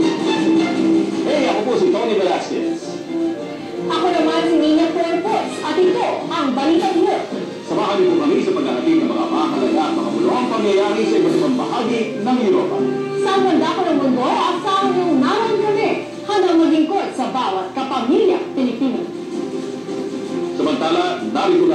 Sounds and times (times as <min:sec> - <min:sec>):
Music: 0:00.0 - 0:21.7
Speech: 0:01.2 - 0:02.9, 0:03.9 - 0:19.0, 0:20.6 - 0:21.7.